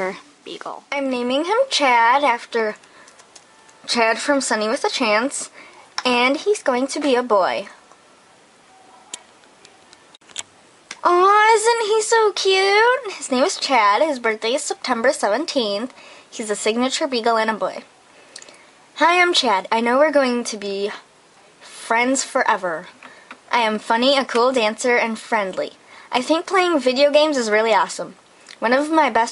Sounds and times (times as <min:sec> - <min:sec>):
Speech: 0:00.0 - 0:02.8, 0:03.8 - 0:07.8, 0:10.9 - 0:17.9, 0:19.0 - 0:29.3.